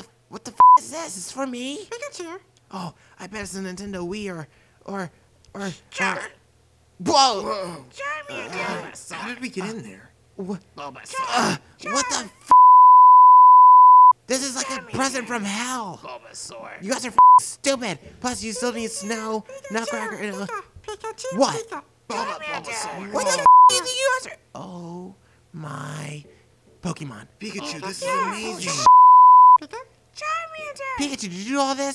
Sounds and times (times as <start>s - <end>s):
Beep, bleep: 12.5s - 14.2s, 17.2s - 17.4s, 23.4s - 23.8s, 28.9s - 29.6s.